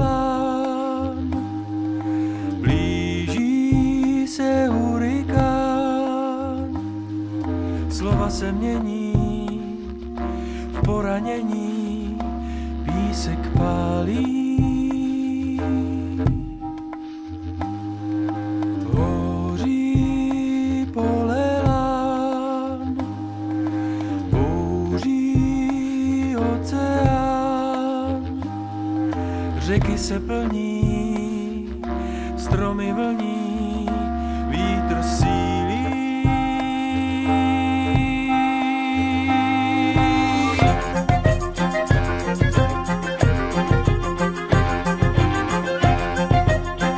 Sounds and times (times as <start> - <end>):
Music: 0.0 - 46.9.